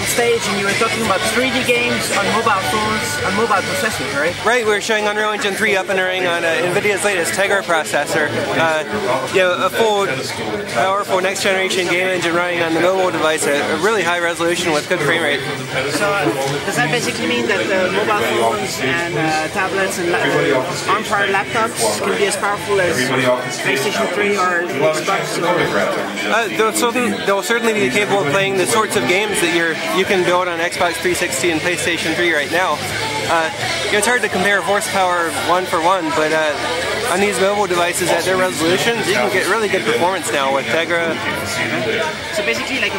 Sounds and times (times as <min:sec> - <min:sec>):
Speech: 0:00.0 - 0:42.9.